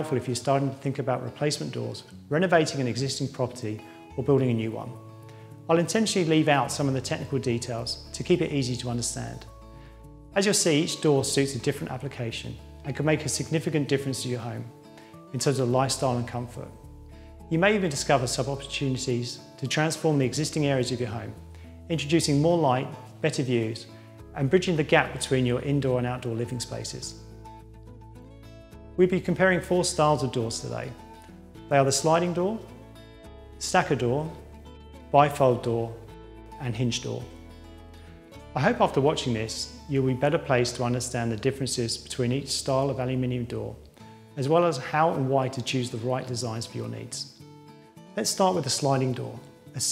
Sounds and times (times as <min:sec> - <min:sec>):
Speech: 0:00.0 - 0:05.0, 0:05.7 - 0:09.5, 0:10.4 - 0:14.7, 0:15.3 - 0:16.8, 0:17.5 - 0:27.2, 0:29.0 - 0:31.0, 0:31.7 - 0:32.7, 0:33.6 - 0:34.4, 0:35.1 - 0:37.3, 0:38.6 - 0:43.8, 0:44.4 - 0:47.4, 0:48.2 - 0:49.9
Music: 0:00.0 - 0:49.9.